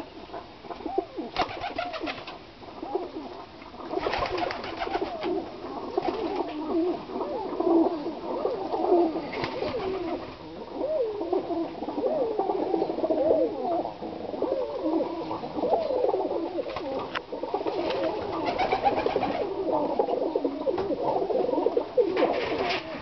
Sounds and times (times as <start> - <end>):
Pigeon, dove: 0.0 - 23.0.